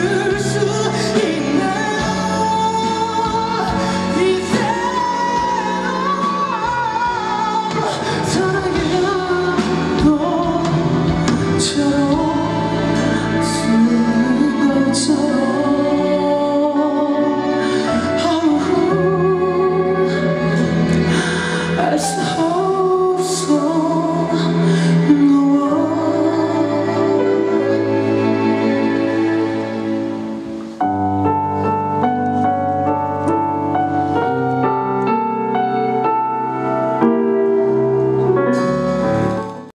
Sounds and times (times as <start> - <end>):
Inside, large room or hall: 0.0 - 39.7
Music: 0.0 - 39.7.